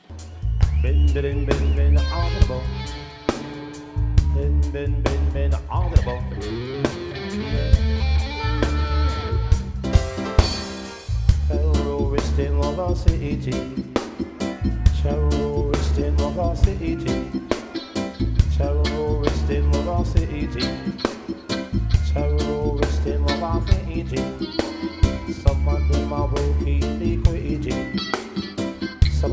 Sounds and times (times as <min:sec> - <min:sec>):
Music: 0:00.0 - 0:29.3.